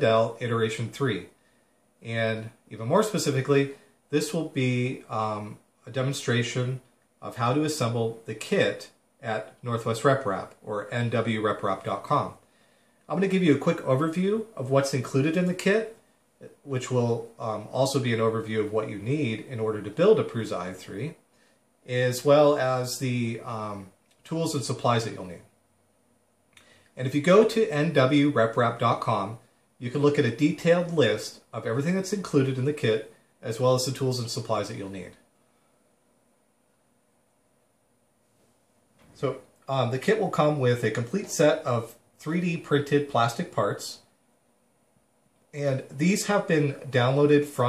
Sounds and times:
Speech: 0:00.0 - 0:01.4, 0:02.0 - 0:12.5, 0:13.1 - 0:21.2, 0:21.8 - 0:25.5, 0:27.0 - 0:35.3, 0:39.2 - 0:44.1, 0:45.6 - 0:47.6.

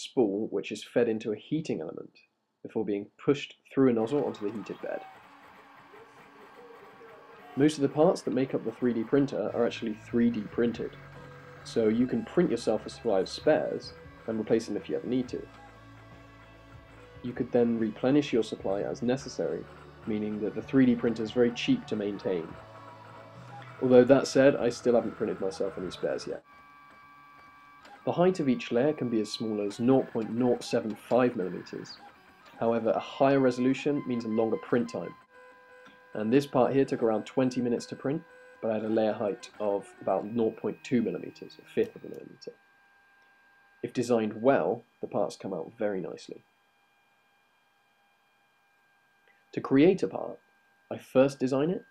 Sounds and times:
Speech: 0:00.0 - 0:02.1, 0:02.7 - 0:05.1, 0:07.6 - 0:11.0, 0:11.7 - 0:15.5, 0:17.2 - 0:22.5, 0:23.8 - 0:26.4, 0:28.1 - 0:32.0, 0:32.6 - 0:35.2, 0:36.2 - 0:42.5, 0:43.8 - 0:46.4, 0:49.6 - 0:51.9
Printer: 0:03.9 - 0:51.9
Music: 0:09.8 - 0:26.3.

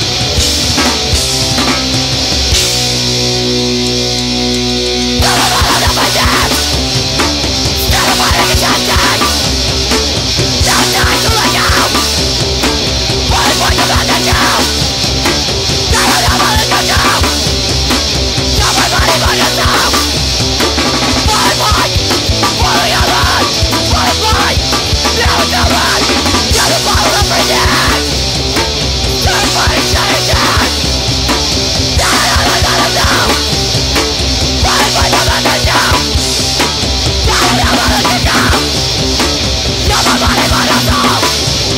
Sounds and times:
Heavy metal: 0:00.0 - 0:41.7
Progressive rock: 0:00.0 - 0:41.7
Punk rock: 0:00.0 - 0:41.7
Yell: 0:05.2 - 0:06.8, 0:07.8 - 0:09.4, 0:10.6 - 0:12.0, 0:13.3 - 0:14.8, 0:15.9 - 0:17.4, 0:18.6 - 0:20.2, 0:21.2 - 0:28.1, 0:29.2 - 0:30.8, 0:32.0 - 0:33.4, 0:34.6 - 0:36.2, 0:37.2 - 0:38.7, 0:39.8 - 0:41.4.

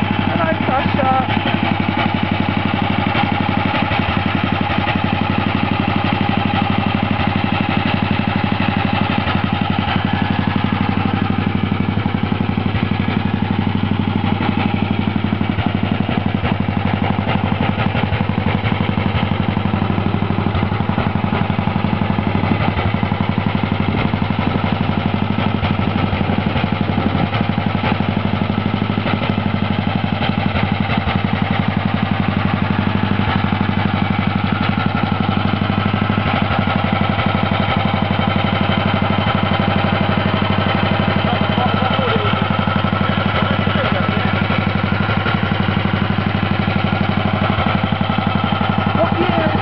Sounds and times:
Idling: 0:00.0 - 0:49.6
Medium engine (mid frequency): 0:00.0 - 0:49.6.

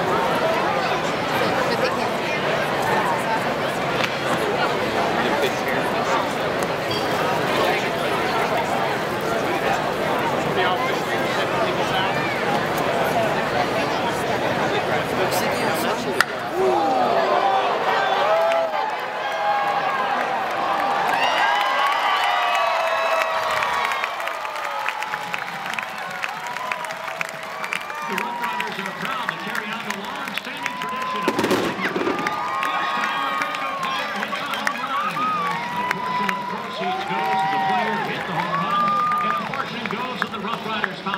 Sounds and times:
Speech: 0:00.0 - 0:18.8, 0:27.9 - 0:41.1.

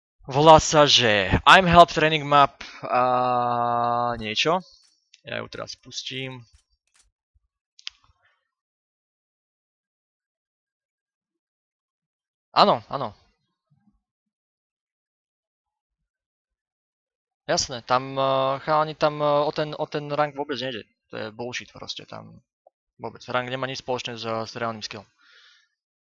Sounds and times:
Speech: 0:00.3 - 0:06.5, 0:12.6 - 0:13.2, 0:17.5 - 0:22.4, 0:23.0 - 0:25.1.

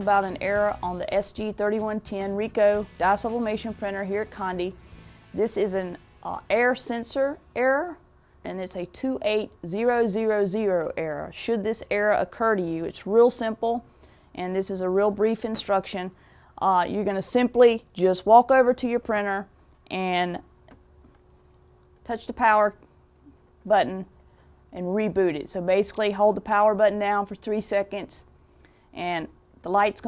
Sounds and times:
Speech: 0:00.0 - 0:04.8, 0:05.4 - 0:20.5, 0:22.1 - 0:22.8, 0:23.7 - 0:24.1, 0:24.7 - 0:28.3, 0:29.0 - 0:30.0.

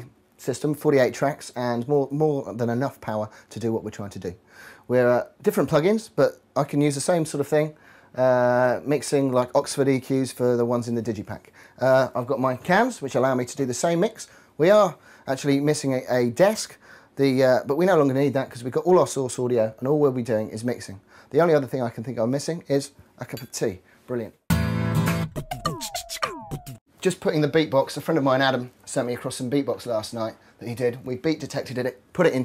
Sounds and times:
Speech: 0:00.0 - 0:24.4, 0:27.0 - 0:32.4.

